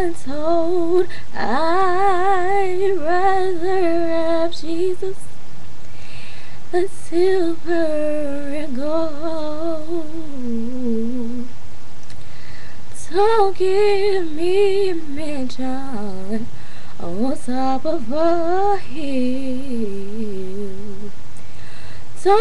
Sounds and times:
Female singing: 0:00.0 - 0:05.3, 0:06.8 - 0:11.5, 0:13.0 - 0:21.1, 0:22.2 - 0:22.4.

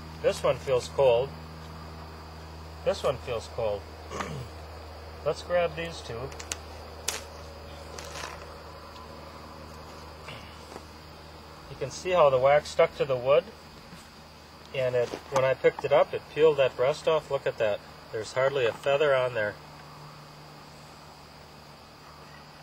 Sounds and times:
Speech: 0:00.2 - 0:01.4, 0:02.8 - 0:03.8, 0:05.2 - 0:06.4, 0:11.7 - 0:13.5, 0:14.7 - 0:19.6.

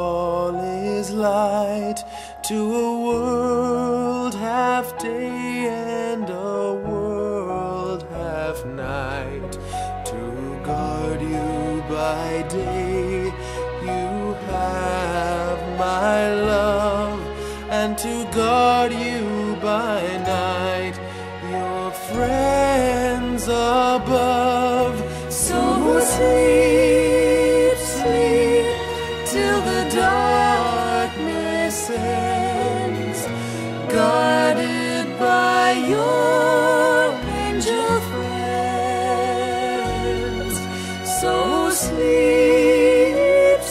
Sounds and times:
Lullaby: 0:00.0 - 0:43.7.

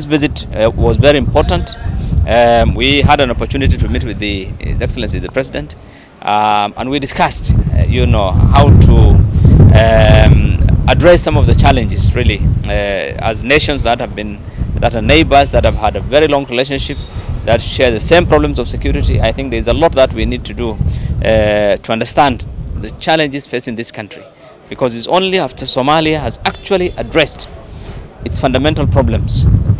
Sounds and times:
Speech: 0:00.0 - 0:09.2, 0:09.8 - 0:27.6, 0:28.2 - 0:29.5.

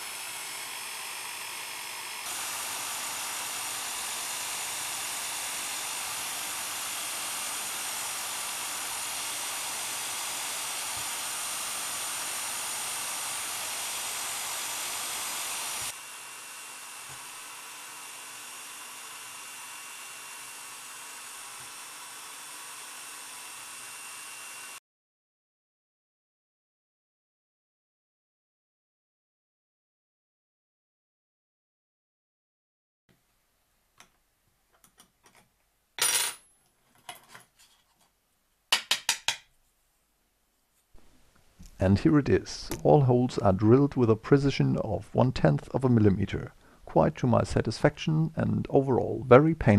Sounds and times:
Speech: 0:41.8 - 0:49.7.

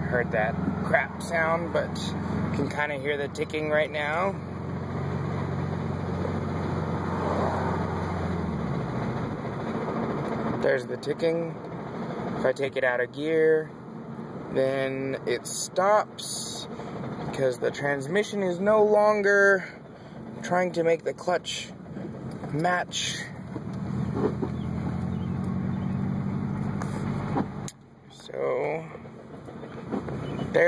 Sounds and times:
Speech: 0:00.0 - 0:04.4, 0:10.6 - 0:11.6, 0:12.4 - 0:13.7, 0:14.5 - 0:16.7, 0:17.3 - 0:19.8, 0:20.4 - 0:21.8, 0:22.5 - 0:23.4, 0:28.1 - 0:29.0.

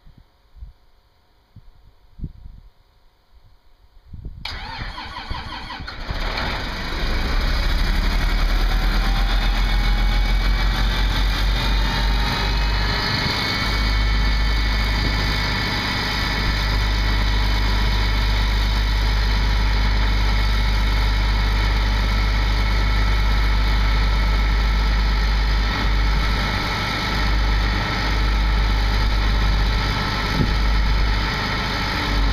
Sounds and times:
Medium engine (mid frequency): 0:04.4 - 0:32.3
Vehicle: 0:04.4 - 0:32.3.

